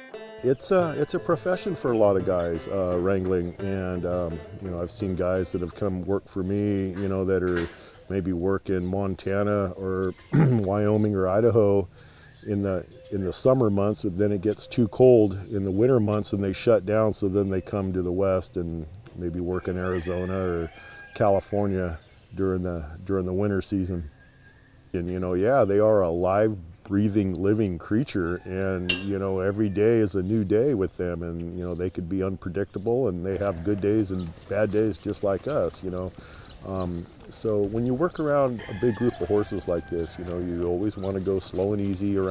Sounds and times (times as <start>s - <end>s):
Speech: 0.4s - 11.9s, 12.5s - 24.1s, 25.0s - 42.3s.